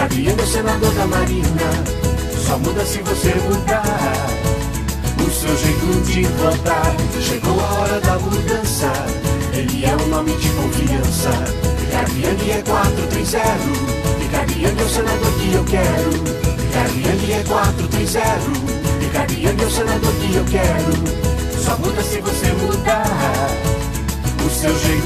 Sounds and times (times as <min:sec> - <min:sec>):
Jingle (music): 0:00.0 - 0:25.0.